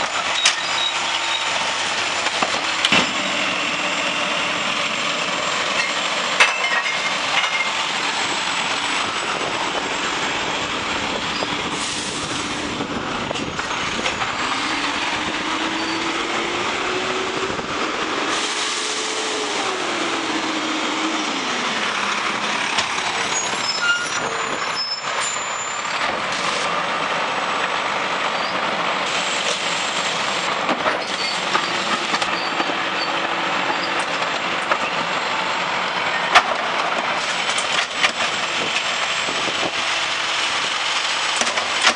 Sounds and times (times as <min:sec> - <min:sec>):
Outside, urban or manmade: 0:00.0 - 0:41.9
Truck: 0:00.0 - 0:41.9.